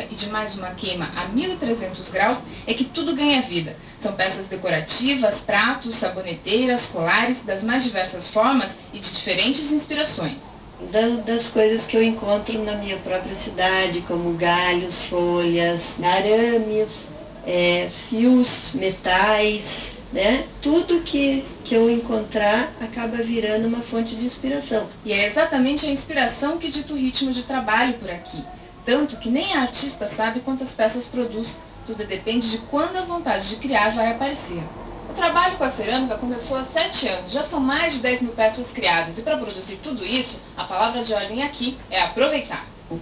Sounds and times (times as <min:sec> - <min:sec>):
Speech: 0:00.0 - 0:43.0.